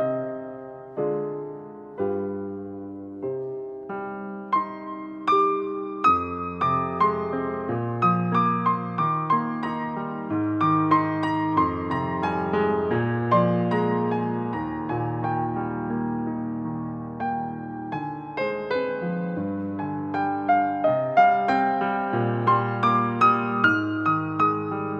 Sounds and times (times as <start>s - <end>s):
Music: 0.0s - 24.9s.